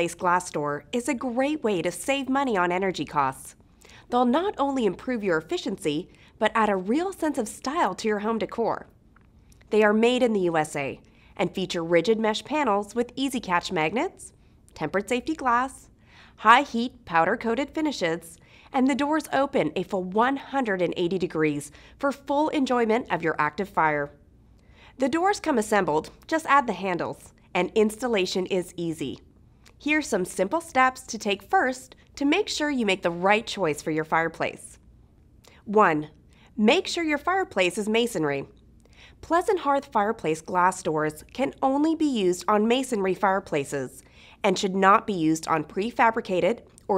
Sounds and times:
Speech: 0.0 - 8.9, 9.7 - 24.2, 25.0 - 34.8, 35.5 - 38.6, 39.2 - 46.9.

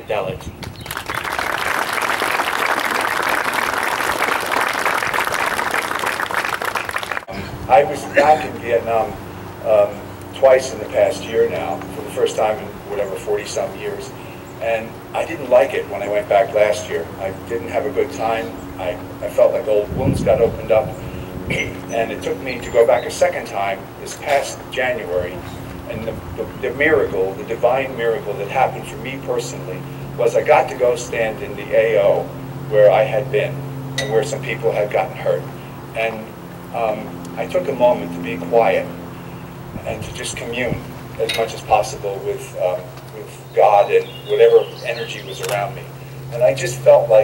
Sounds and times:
Male speech, man speaking: 0.0 - 0.5, 7.7 - 21.0, 21.6 - 39.0, 39.8 - 47.2
Narration, monologue: 0.0 - 0.8, 7.2 - 47.2.

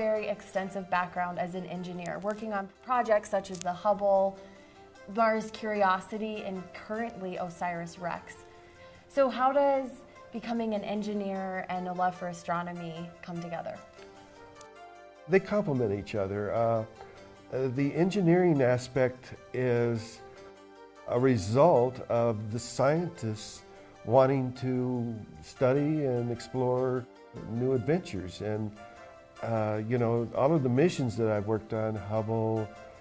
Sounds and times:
Music: 0.0 - 33.0.

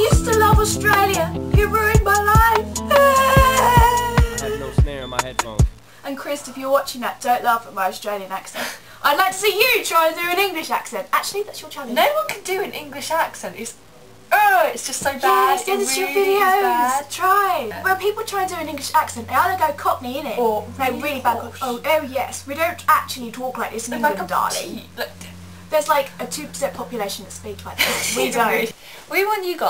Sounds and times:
Speech: 4.2 - 29.7.

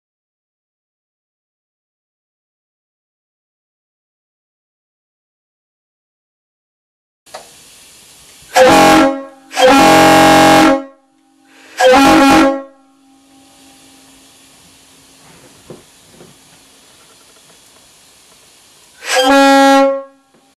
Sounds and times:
Vehicle horn, car horn, honking: 8.6 - 13.6, 19.0 - 20.5.

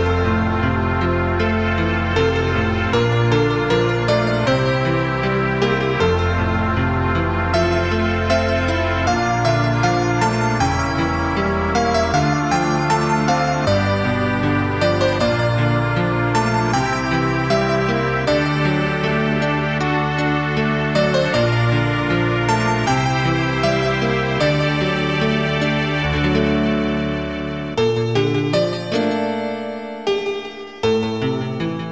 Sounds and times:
New-age music: 0.0 - 31.9.

